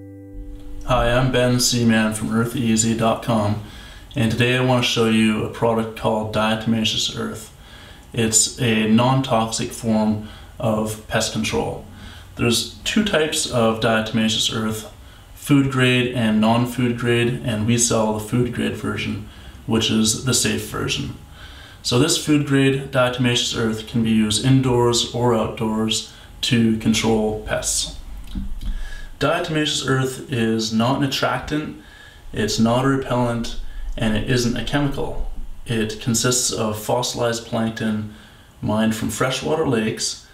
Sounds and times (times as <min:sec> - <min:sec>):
Speech: 0:00.9 - 0:07.5, 0:08.1 - 0:21.2, 0:21.8 - 0:28.0, 0:29.2 - 0:40.3.